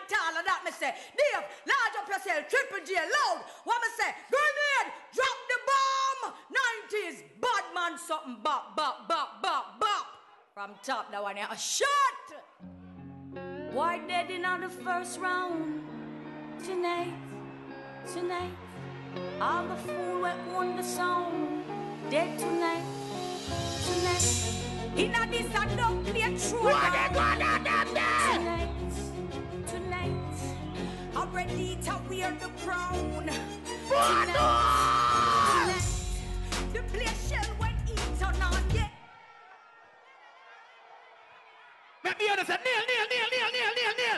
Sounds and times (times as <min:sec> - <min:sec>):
Music: 0:12.6 - 0:39.0.